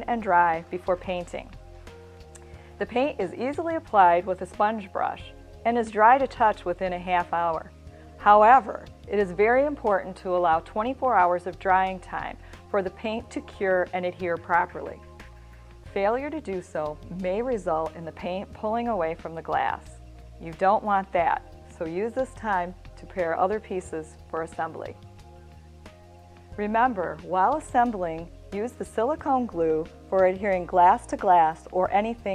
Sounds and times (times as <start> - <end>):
Speech: 0.0 - 1.5, 2.8 - 15.0, 15.9 - 25.0, 26.6 - 32.3
Music: 0.0 - 32.3.